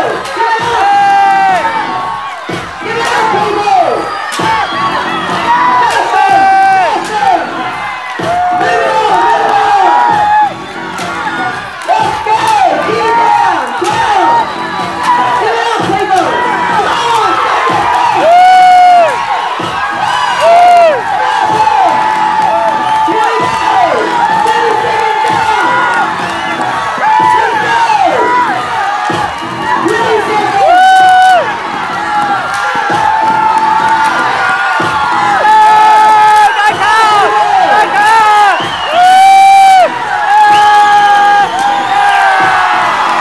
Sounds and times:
Speech: 0:02.8 - 0:04.0, 0:15.1 - 0:17.4.

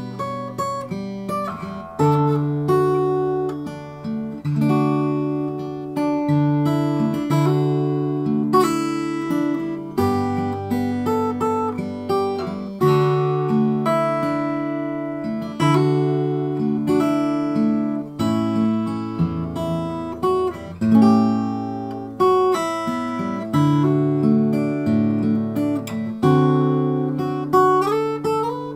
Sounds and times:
Guitar: 0:00.0 - 0:28.7.

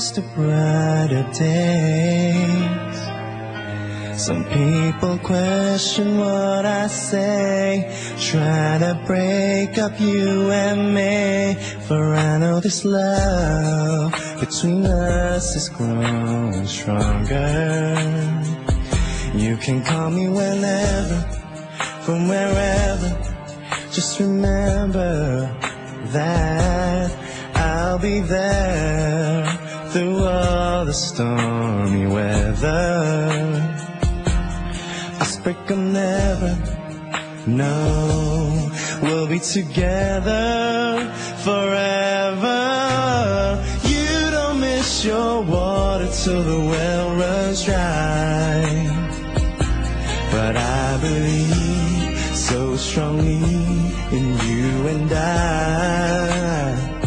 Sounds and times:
Music: 0:00.0 - 0:57.0.

